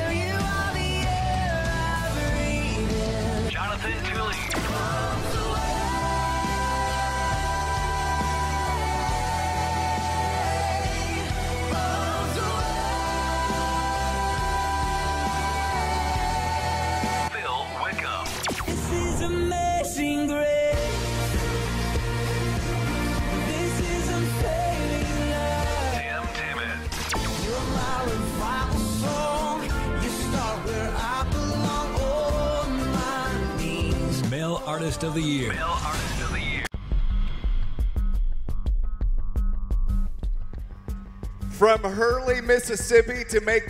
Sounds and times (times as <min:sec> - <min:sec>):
Gospel music: 0:00.0 - 0:36.4
Speech: 0:03.5 - 0:04.6, 0:17.3 - 0:18.4, 0:26.0 - 0:26.9, 0:34.2 - 0:36.7, 0:41.6 - 0:43.7.